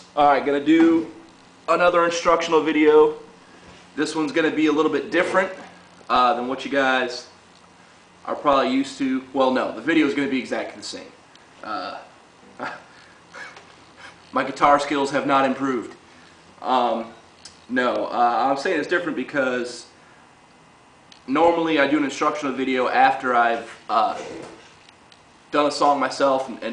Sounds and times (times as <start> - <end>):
Speech: 0.2 - 3.3, 4.0 - 7.4, 8.2 - 12.1, 14.3 - 16.0, 16.6 - 20.0, 21.3 - 24.6, 25.5 - 26.7.